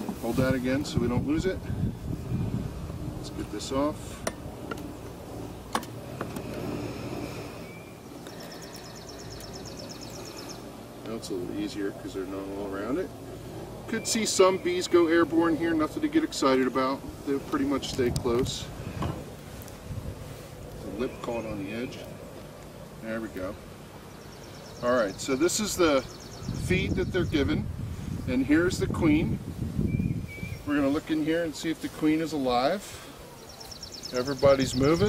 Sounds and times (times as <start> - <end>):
Speech: 0.0 - 1.6, 3.2 - 4.1, 11.0 - 13.1, 13.9 - 18.7, 20.8 - 22.1, 23.0 - 23.6, 24.8 - 27.7, 28.3 - 29.4, 30.7 - 33.0, 34.1 - 35.0.